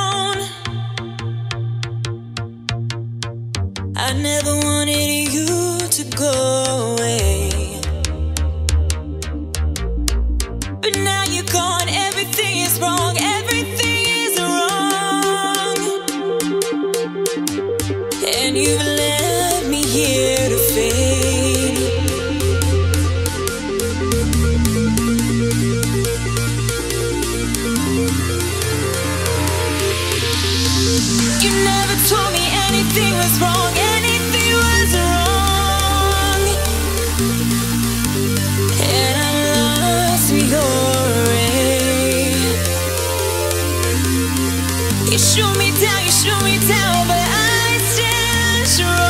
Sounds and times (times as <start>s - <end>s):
Dubstep: 0.0s - 49.0s.